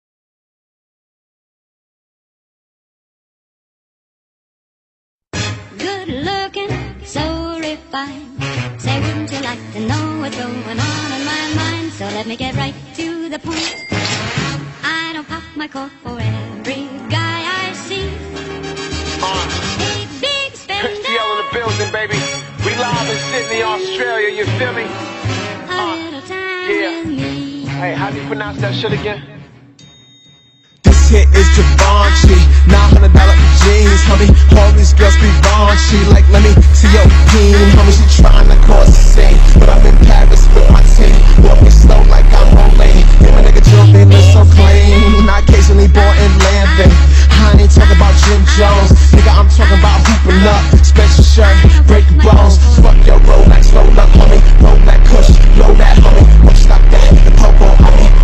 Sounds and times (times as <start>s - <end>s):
Music: 5.3s - 58.2s.